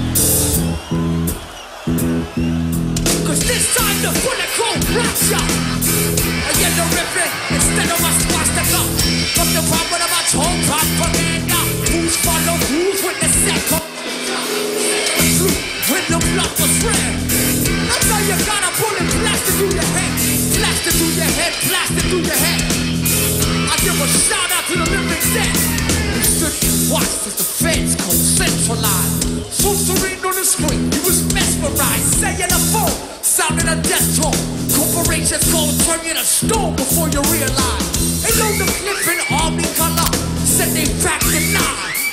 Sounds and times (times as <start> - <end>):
Rhythm and blues: 0.0 - 42.1.